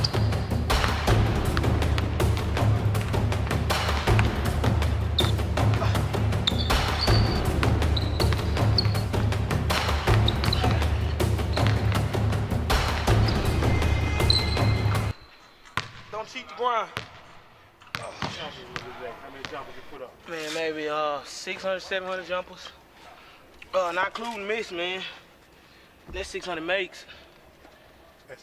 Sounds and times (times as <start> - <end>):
Music: 0.0 - 15.2.